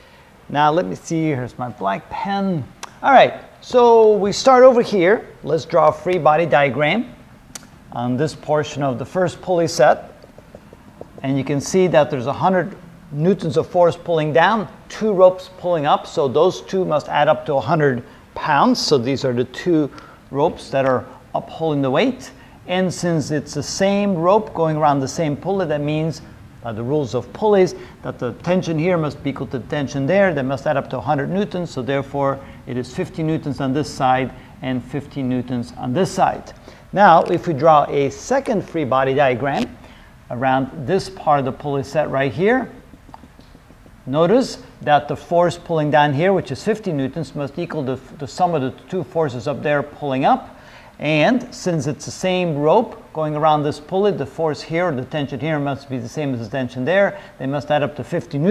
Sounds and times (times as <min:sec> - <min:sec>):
Speech: 0:00.5 - 0:07.2, 0:07.9 - 0:10.2, 0:11.2 - 0:42.8, 0:44.0 - 0:58.5.